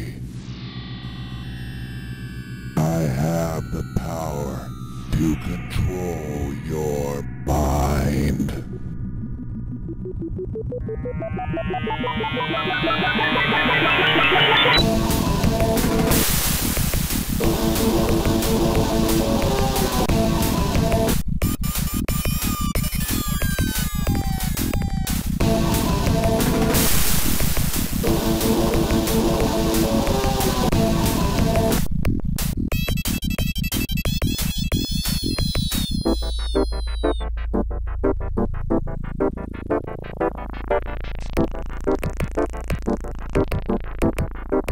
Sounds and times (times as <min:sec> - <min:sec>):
Hum: 0:00.0 - 0:21.3.